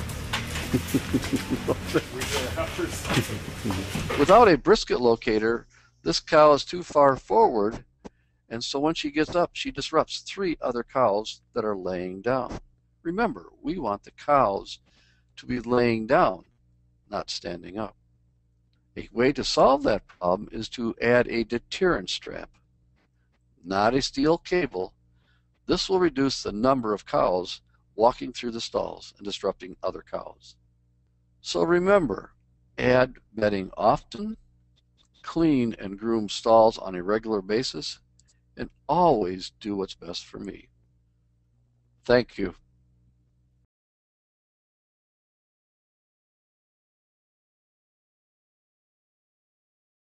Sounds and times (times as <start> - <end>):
Speech: 0.7 - 7.8, 8.5 - 14.8, 15.4 - 16.4, 17.2 - 17.9, 19.0 - 22.5, 23.7 - 24.9, 25.7 - 30.5, 31.5 - 34.4, 35.3 - 38.0, 38.6 - 40.6, 42.1 - 42.6.